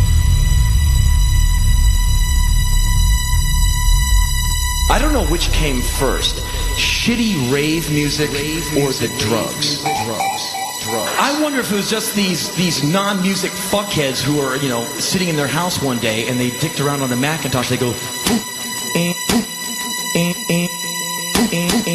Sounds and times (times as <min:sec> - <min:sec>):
Music: 0:00.0 - 0:21.9
Speech: 0:04.9 - 0:18.5.